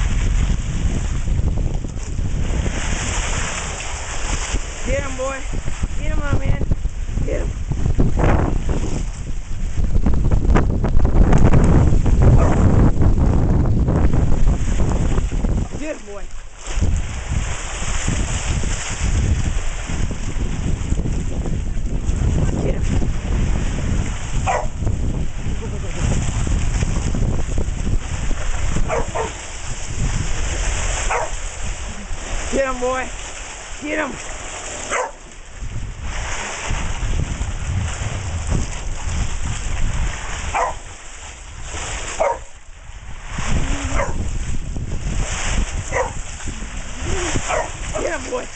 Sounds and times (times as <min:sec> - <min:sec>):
Speech: 0:04.8 - 0:07.5, 0:15.8 - 0:16.3, 0:22.6 - 0:22.9, 0:25.6 - 0:26.1, 0:32.5 - 0:33.1, 0:33.8 - 0:34.2, 0:47.0 - 0:48.5
Bow-wow: 0:12.3 - 0:12.6, 0:24.4 - 0:24.8, 0:28.8 - 0:29.4, 0:31.0 - 0:31.4, 0:34.9 - 0:35.2, 0:40.5 - 0:40.8, 0:42.2 - 0:42.5, 0:43.7 - 0:44.3, 0:45.9 - 0:46.2, 0:47.4 - 0:47.9.